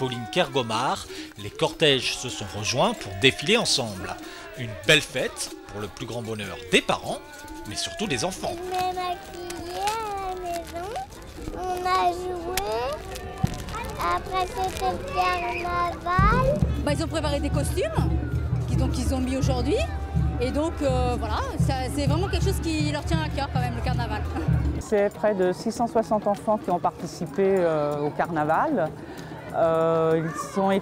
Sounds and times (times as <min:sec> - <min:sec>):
Music: 0:00.0 - 0:30.8.